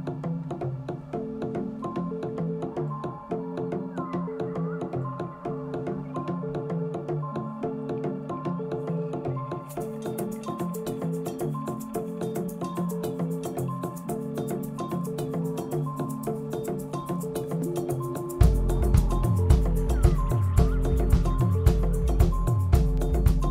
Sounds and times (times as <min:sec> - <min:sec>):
Music: 0:00.0 - 0:23.5.